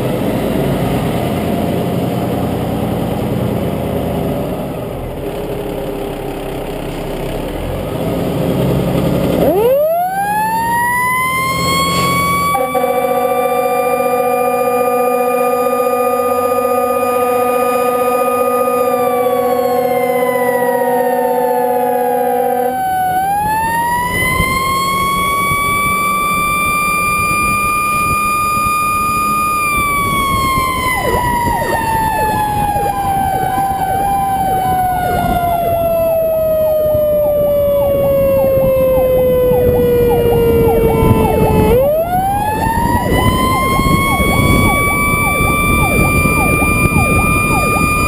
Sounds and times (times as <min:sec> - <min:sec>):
Fire engine, fire truck (siren): 0:00.0 - 0:08.0, 0:09.0 - 0:48.0.